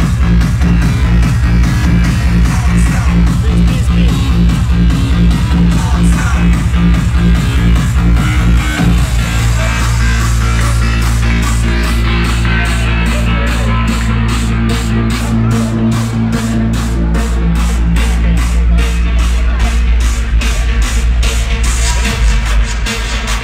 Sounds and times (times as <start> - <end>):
Music: 0.0 - 23.4.